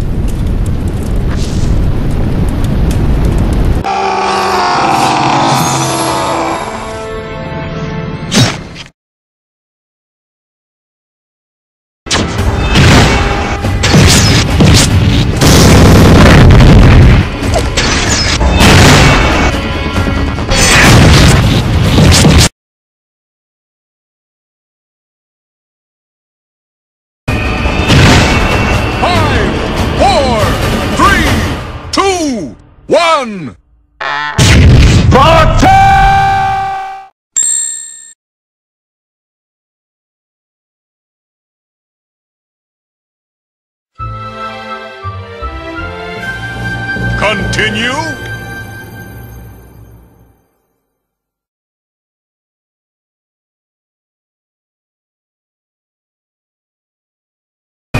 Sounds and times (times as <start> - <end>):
Music: 6.3 - 8.9, 12.1 - 15.4, 16.6 - 22.0, 27.3 - 32.9, 44.0 - 51.4.